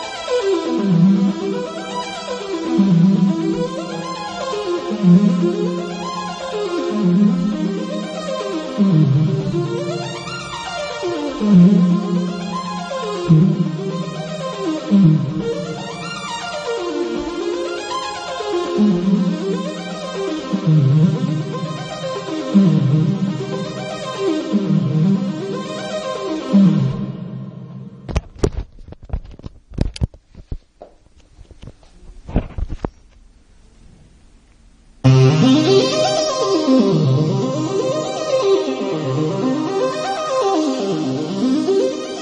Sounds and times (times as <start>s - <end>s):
Synthesizer: 0.0s - 28.4s, 35.0s - 42.2s.